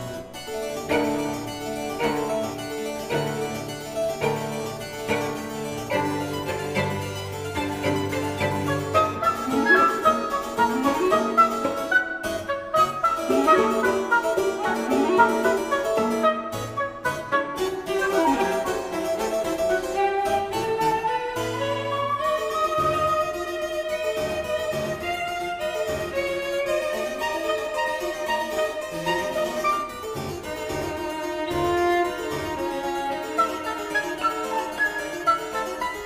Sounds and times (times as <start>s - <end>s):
Harpsichord: 0.0s - 36.0s
Piano: 0.0s - 36.0s.